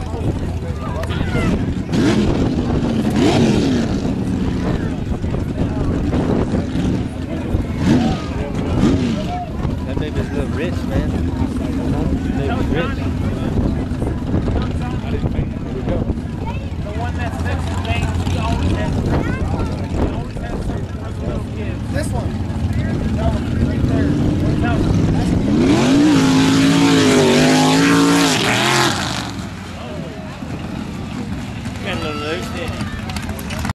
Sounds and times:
Speech: 4.4 - 25.6.

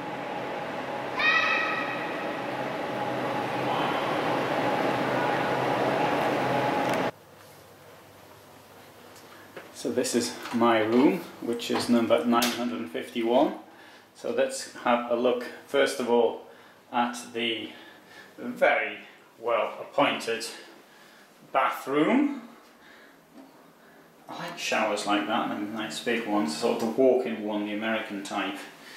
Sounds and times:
Speech: 9.8 - 17.8, 18.4 - 20.7, 21.5 - 22.6, 24.3 - 28.8.

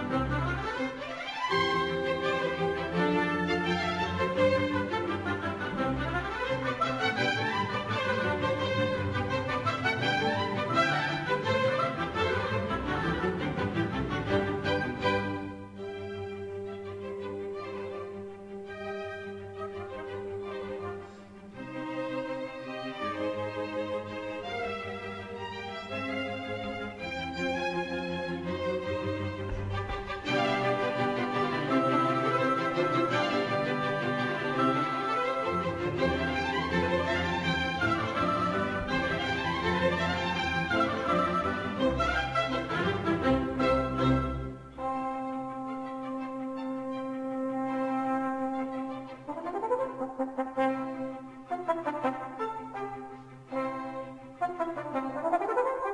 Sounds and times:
Cello: 0.0 - 55.9.

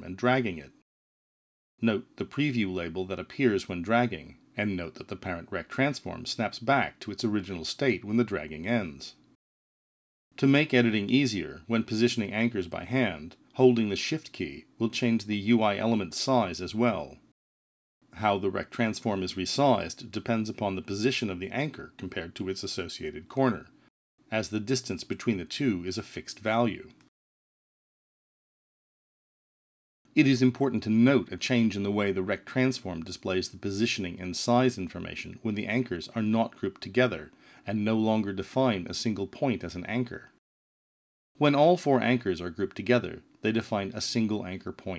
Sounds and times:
Speech: 0.0 - 0.8, 1.8 - 9.2, 10.4 - 17.3, 18.1 - 27.1, 30.1 - 40.4, 41.4 - 44.9.

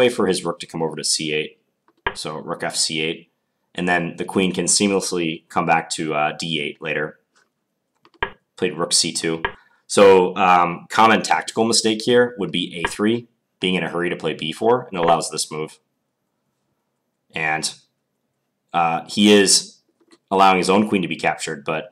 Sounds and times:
Speech: 0.0 - 7.2, 8.6 - 15.9, 17.3 - 17.9, 18.7 - 21.9.

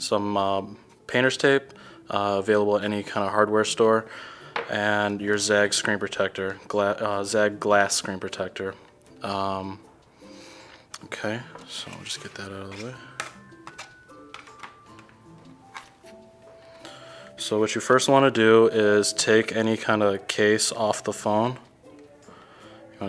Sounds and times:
Music: 0.0 - 23.0
Speech: 4.7 - 9.8, 11.0 - 13.0, 17.4 - 21.6.

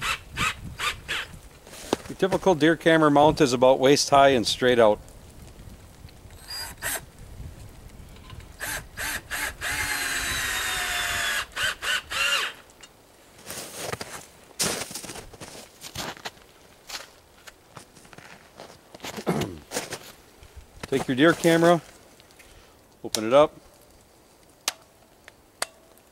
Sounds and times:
Speech: 2.1 - 5.0, 20.9 - 21.9, 23.0 - 23.6
Drill: 6.4 - 7.0, 8.6 - 12.6.

